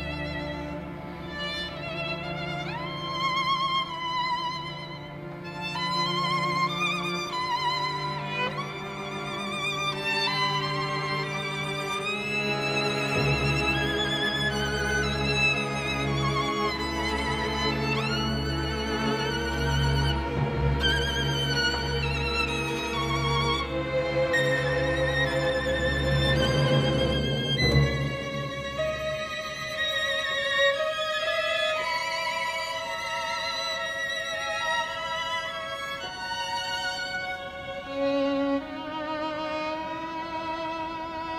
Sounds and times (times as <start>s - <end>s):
Violin, fiddle: 0.0s - 41.3s.